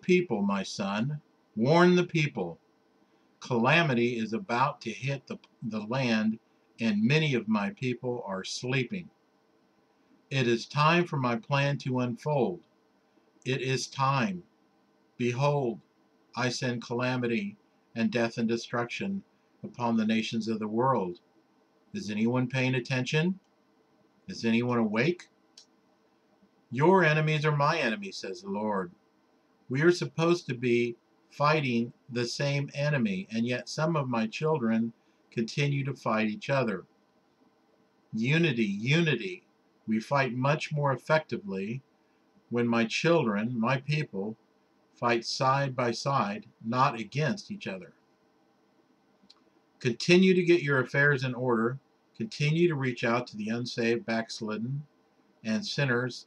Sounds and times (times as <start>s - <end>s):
Speech: 0.0s - 2.6s, 3.4s - 9.1s, 10.3s - 12.6s, 13.5s - 14.5s, 15.2s - 15.8s, 16.4s - 21.2s, 22.0s - 23.4s, 24.3s - 25.3s, 26.7s - 28.9s, 29.7s - 36.9s, 38.2s - 41.8s, 42.5s - 44.4s, 45.0s - 47.9s, 49.8s - 56.2s.